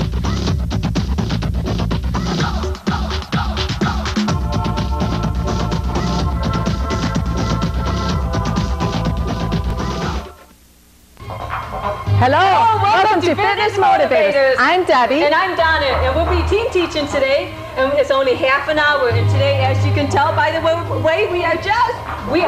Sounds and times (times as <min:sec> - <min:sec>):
Music: 0:00.0 - 0:10.6, 0:11.2 - 0:22.4
Speech: 0:12.2 - 0:22.4.